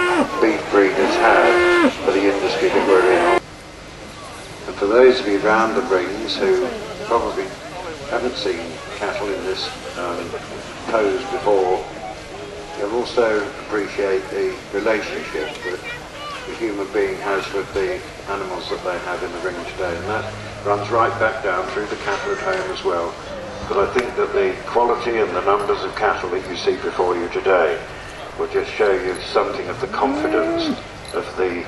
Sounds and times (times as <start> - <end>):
Speech: 0.3 - 3.4, 4.7 - 12.0, 12.8 - 31.6.